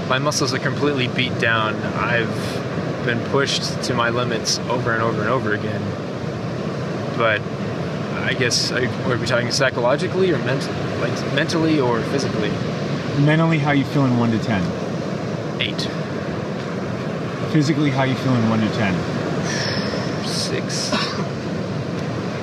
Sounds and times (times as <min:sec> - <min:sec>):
Speech: 0:00.0 - 0:05.9, 0:07.2 - 0:07.4, 0:08.1 - 0:12.6, 0:13.2 - 0:14.8, 0:15.6 - 0:16.0, 0:17.5 - 0:21.1.